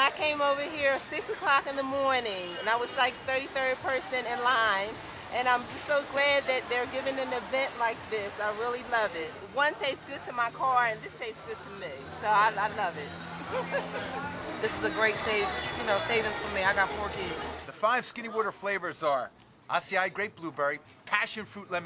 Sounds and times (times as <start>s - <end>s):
Music: 10.6s - 17.7s.